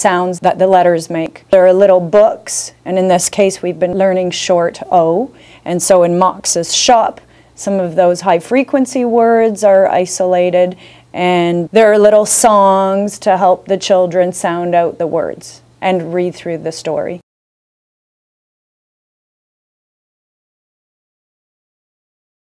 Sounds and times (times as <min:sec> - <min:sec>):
Speech: 0:00.0 - 0:17.2.